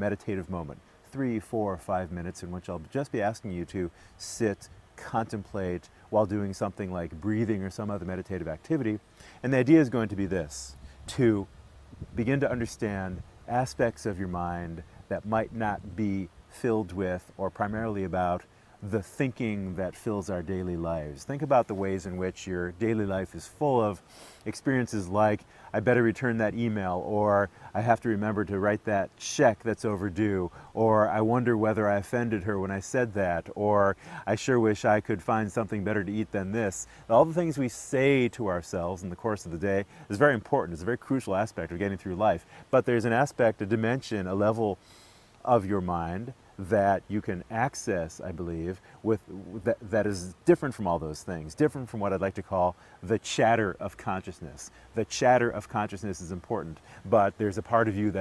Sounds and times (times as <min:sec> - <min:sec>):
Speech: 0:00.0 - 0:44.8, 0:45.4 - 0:58.2.